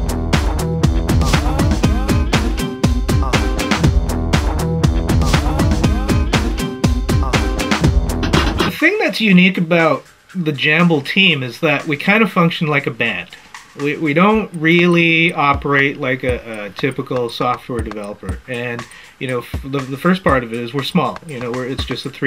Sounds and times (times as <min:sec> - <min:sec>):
Music: 0:00.0 - 0:22.2
Speech: 0:08.7 - 0:22.2.